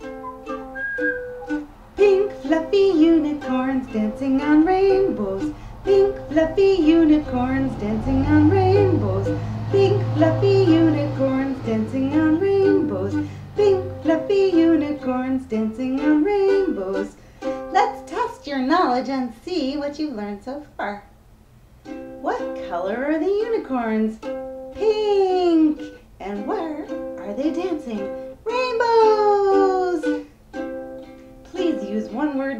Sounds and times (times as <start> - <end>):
Ukulele: 0.0 - 19.1, 21.8 - 32.5
Inside, small room: 0.0 - 32.5
Speech: 17.7 - 21.1, 22.2 - 24.2, 24.8 - 30.1, 31.6 - 32.5.